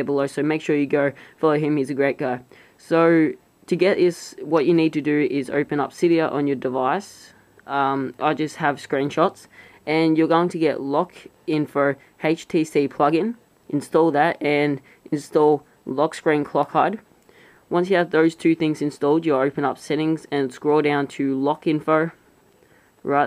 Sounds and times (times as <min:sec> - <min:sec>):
Speech: 0:00.0 - 0:17.1, 0:17.7 - 0:22.2, 0:23.0 - 0:23.2.